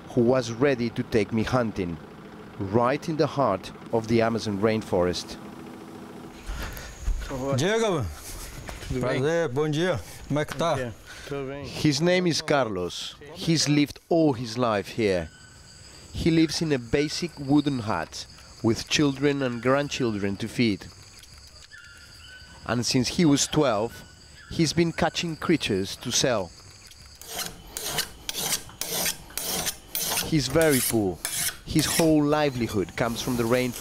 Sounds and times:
Filing (rasp): 27.2s - 33.8s
Rub: 27.2s - 33.8s.

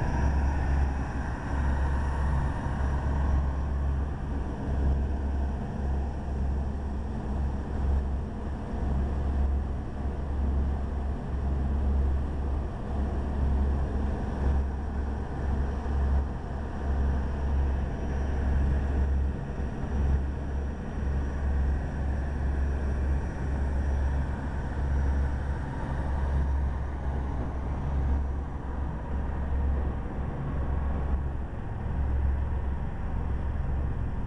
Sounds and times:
Motorboat, speedboat: 0.0s - 34.2s.

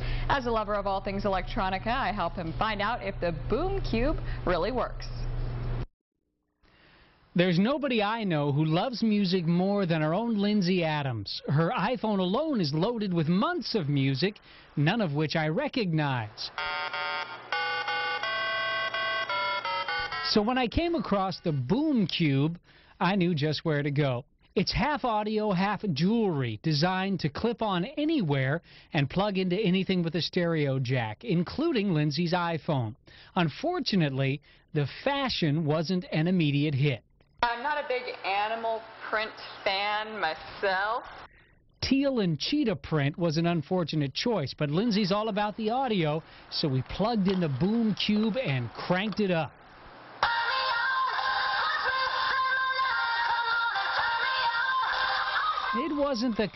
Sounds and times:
Speech: 7.4s - 16.5s, 20.3s - 41.1s, 41.8s - 49.5s, 55.8s - 56.5s
Music: 17.5s - 20.4s, 50.2s - 55.8s.

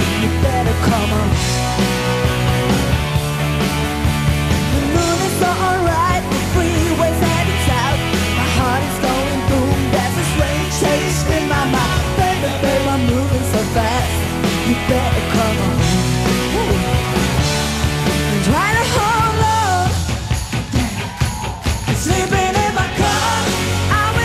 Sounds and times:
Music: 0.0s - 24.2s.

